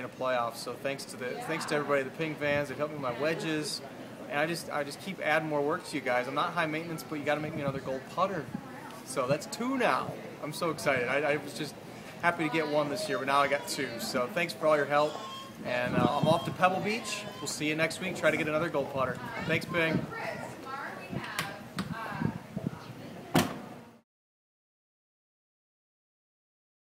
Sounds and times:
Speech: 0.0s - 23.2s.

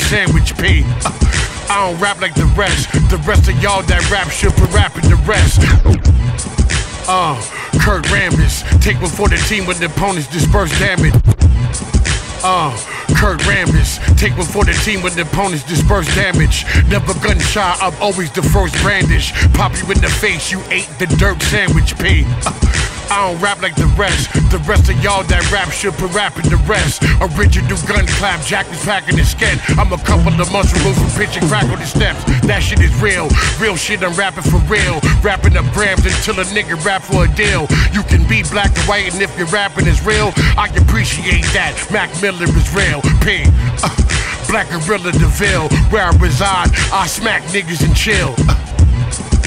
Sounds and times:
Rapping: 0.0s - 6.1s, 7.0s - 11.3s, 12.4s - 49.4s
Hip hop music: 0.0s - 49.4s.

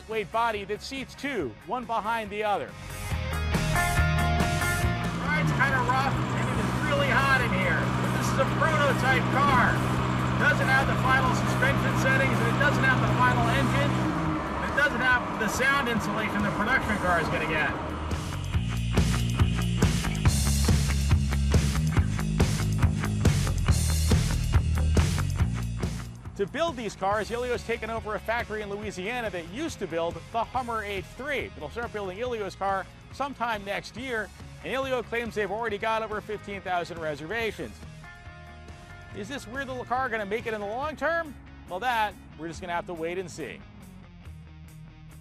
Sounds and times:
Speech: 0.0s - 2.7s, 5.2s - 9.8s, 10.4s - 14.0s, 14.6s - 17.8s, 26.4s - 37.8s, 39.2s - 43.6s
Music: 0.0s - 45.2s
Car: 3.7s - 33.0s.

